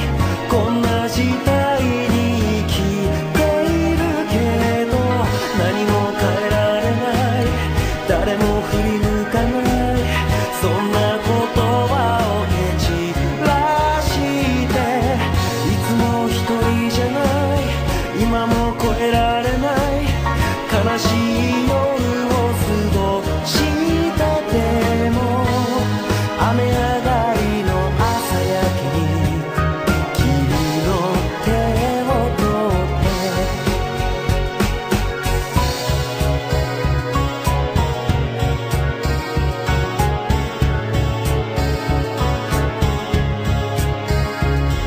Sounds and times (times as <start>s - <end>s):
Singing: 0.0s - 33.8s
Music: 0.0s - 44.8s.